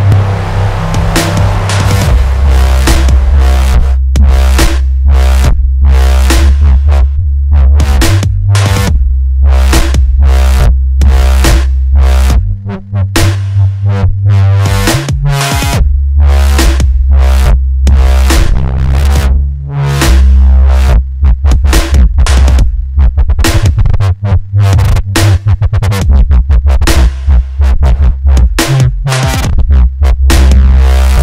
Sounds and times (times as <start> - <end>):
Dubstep: 0.0 - 31.2.